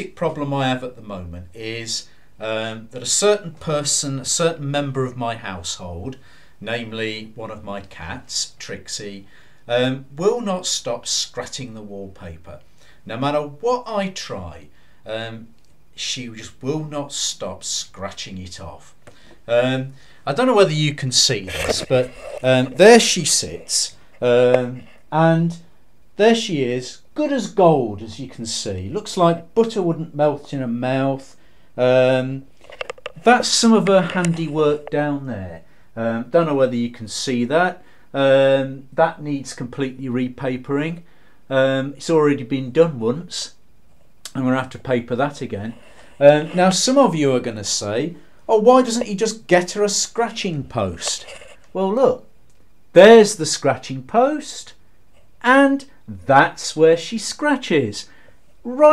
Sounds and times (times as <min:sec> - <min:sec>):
Speech: 0:00.0 - 0:43.6, 0:44.3 - 0:52.3, 0:52.9 - 0:54.8, 0:55.4 - 0:58.9.